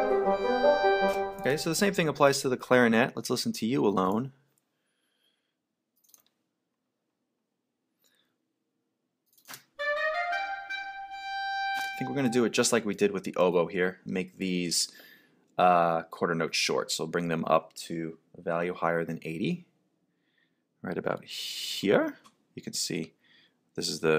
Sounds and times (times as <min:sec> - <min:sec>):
Music: 0:00.0 - 0:01.9, 0:09.8 - 0:12.5
Speech: 0:01.4 - 0:04.4, 0:12.0 - 0:15.0, 0:15.6 - 0:19.7, 0:20.8 - 0:23.1, 0:23.8 - 0:24.1.